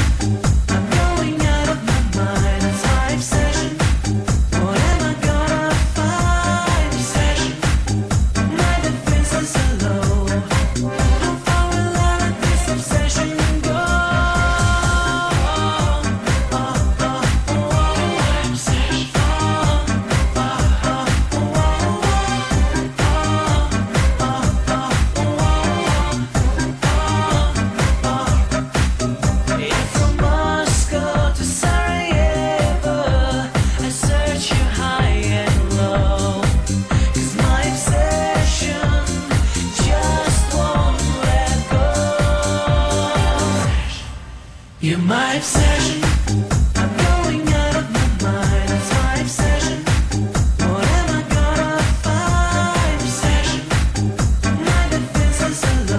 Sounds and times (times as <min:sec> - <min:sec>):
Disco: 0:00.0 - 0:55.9.